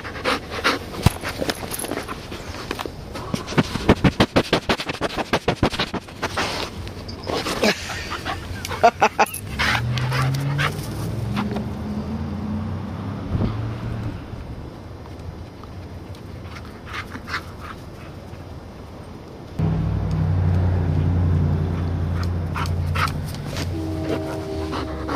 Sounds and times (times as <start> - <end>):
Outside, urban or manmade: 0.0 - 25.1
Dog: 9.6 - 10.8.